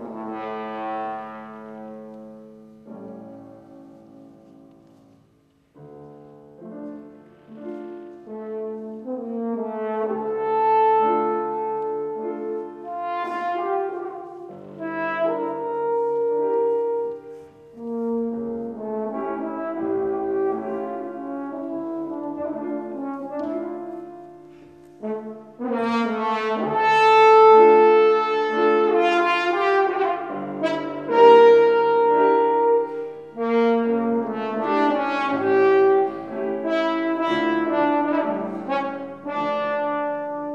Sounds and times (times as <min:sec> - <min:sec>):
Clarinet: 0:00.0 - 0:40.5.